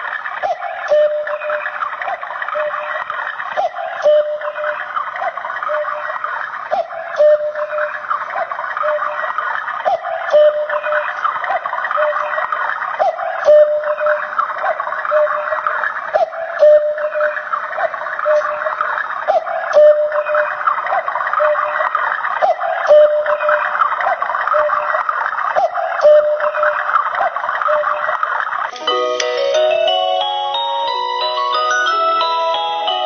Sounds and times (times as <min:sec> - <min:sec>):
Music: 0:28.8 - 0:33.0.